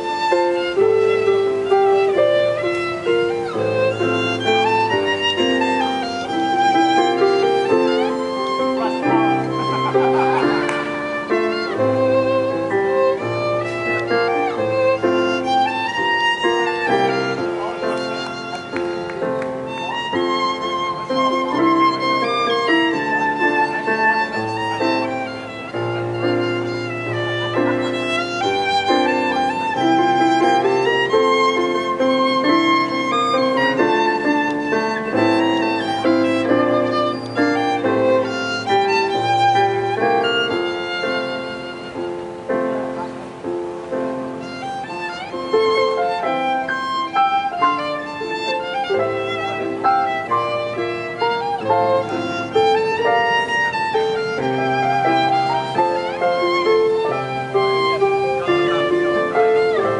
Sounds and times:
Violin, fiddle: 0.0 - 60.0.

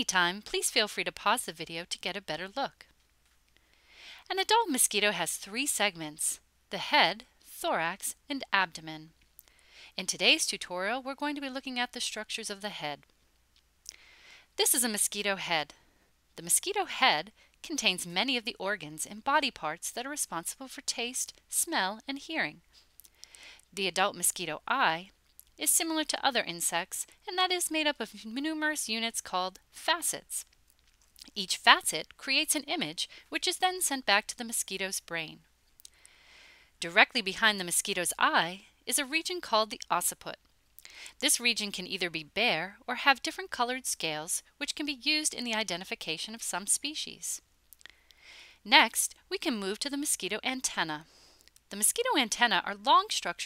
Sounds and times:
Speech: 0.0 - 2.9, 4.3 - 9.1, 10.0 - 13.0, 14.6 - 15.8, 16.4 - 22.6, 23.8 - 30.5, 31.3 - 35.4, 36.8 - 40.4, 41.2 - 47.4, 48.7 - 51.1, 51.7 - 53.4.

